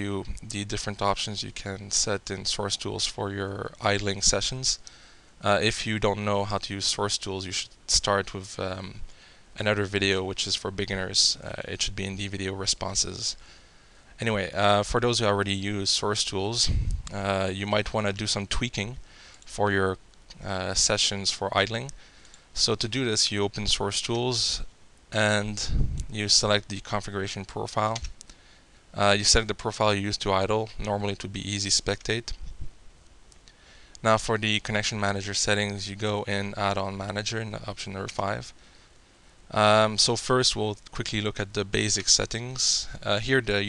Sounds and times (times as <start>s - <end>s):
Speech: 0.0s - 4.8s, 5.4s - 9.0s, 9.6s - 13.4s, 14.2s - 22.0s, 22.6s - 28.1s, 29.0s - 32.4s, 34.0s - 38.6s, 39.5s - 43.6s.